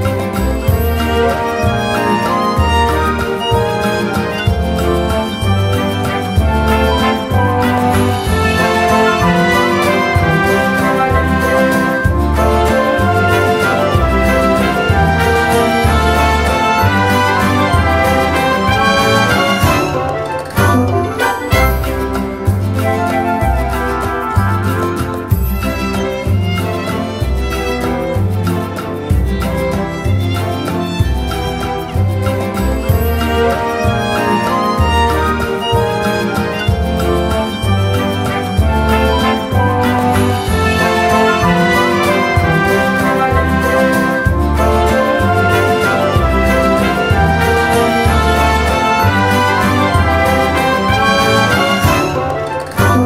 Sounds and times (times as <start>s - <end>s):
Jazz: 0.0s - 53.0s.